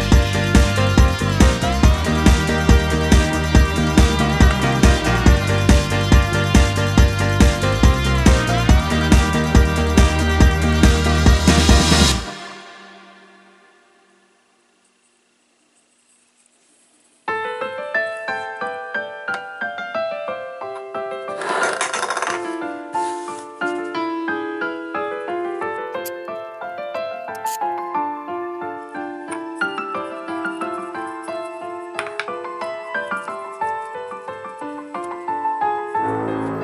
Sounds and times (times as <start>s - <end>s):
Piano: 0.0s - 14.5s, 17.2s - 36.6s.